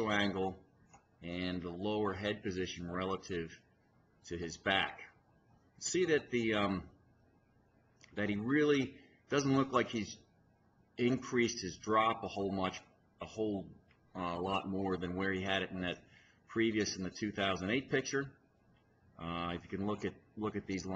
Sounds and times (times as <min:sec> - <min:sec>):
Speech: 0:00.0 - 0:00.6, 0:01.2 - 0:03.6, 0:04.2 - 0:05.2, 0:05.8 - 0:07.0, 0:08.1 - 0:10.3, 0:11.0 - 0:18.4, 0:19.2 - 0:20.9.